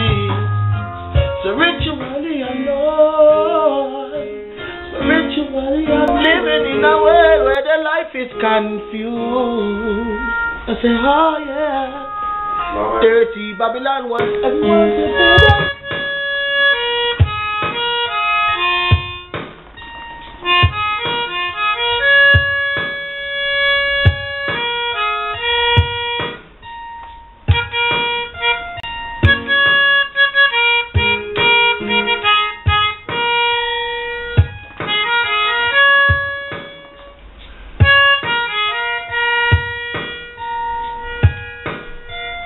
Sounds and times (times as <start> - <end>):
Independent music: 0.0 - 42.4
Speech: 12.8 - 15.7.